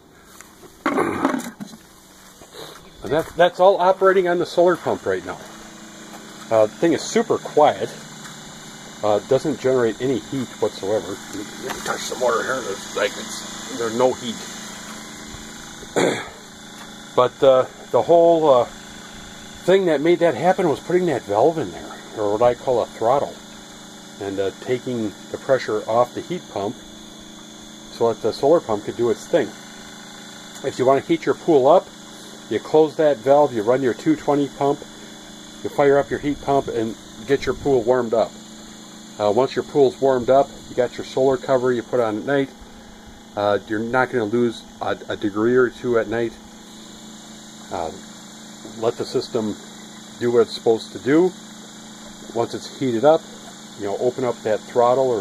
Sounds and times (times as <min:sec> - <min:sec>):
Speech: 0:03.0 - 0:05.5, 0:06.5 - 0:08.0, 0:09.0 - 0:14.5, 0:17.2 - 0:18.8, 0:19.6 - 0:23.4, 0:24.2 - 0:26.8, 0:27.9 - 0:29.6, 0:30.6 - 0:31.9, 0:32.5 - 0:34.9, 0:35.6 - 0:38.4, 0:39.2 - 0:42.5, 0:43.4 - 0:46.4, 0:47.7 - 0:48.1, 0:48.7 - 0:49.6, 0:50.2 - 0:51.4, 0:52.3 - 0:55.2.